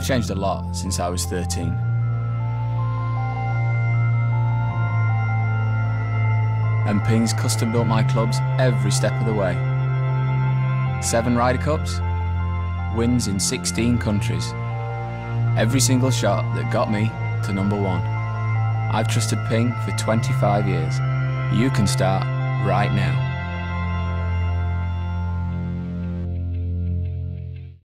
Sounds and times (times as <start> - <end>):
Speech: 0.0 - 1.8, 6.9 - 9.6, 11.0 - 12.0, 13.0 - 14.5, 15.6 - 18.1, 18.9 - 23.2
Music: 0.0 - 27.8.